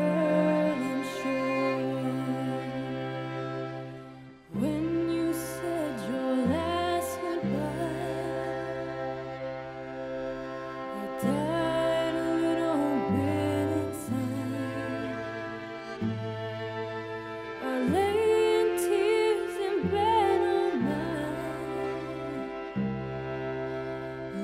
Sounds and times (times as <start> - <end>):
Cello: 0.0 - 24.4.